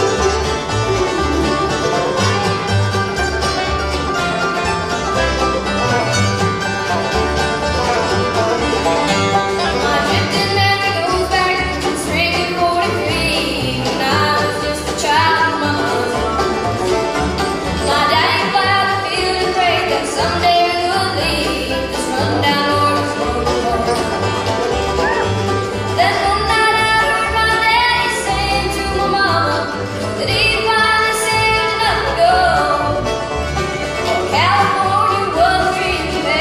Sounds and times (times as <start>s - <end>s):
Bluegrass: 0.0s - 36.4s.